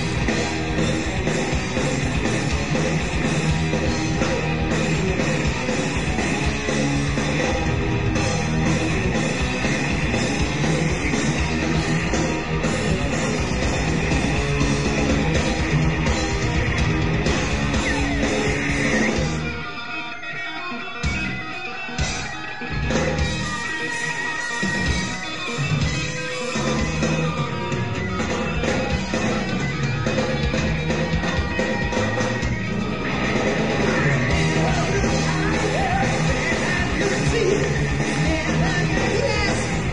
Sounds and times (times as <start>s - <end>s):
Music: 0.0s - 39.9s.